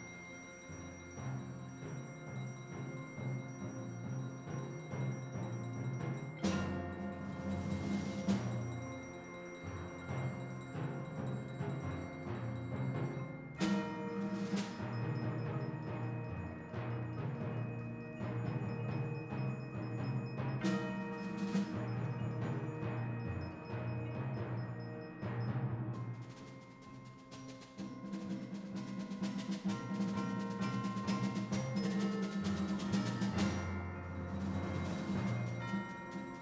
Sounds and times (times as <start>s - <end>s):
Percussion: 0.0s - 36.4s.